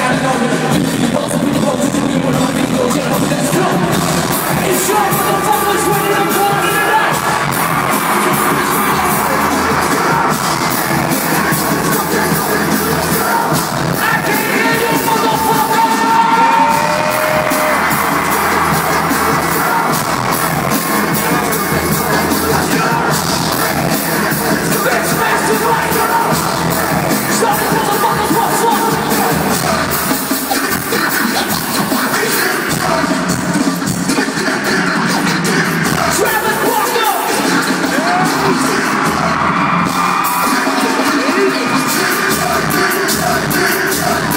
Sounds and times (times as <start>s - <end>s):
Exciting music: 0.0s - 44.3s.